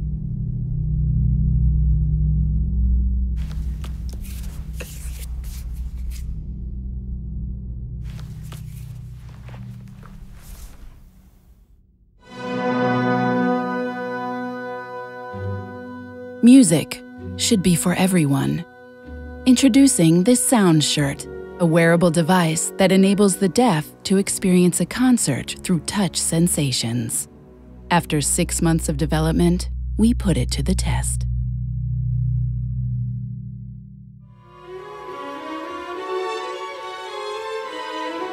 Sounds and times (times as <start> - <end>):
Music: 0.0 - 38.3
Speech: 16.4 - 18.7, 19.5 - 27.3, 27.9 - 31.3.